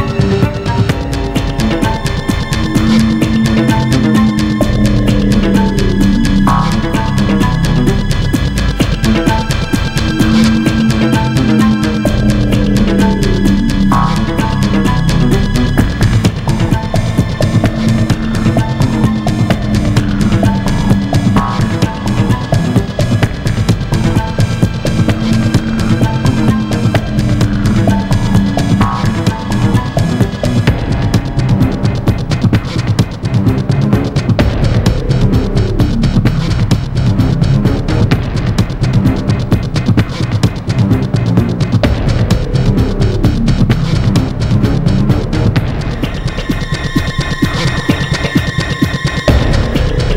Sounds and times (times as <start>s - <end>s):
Theme music: 0.0s - 50.1s.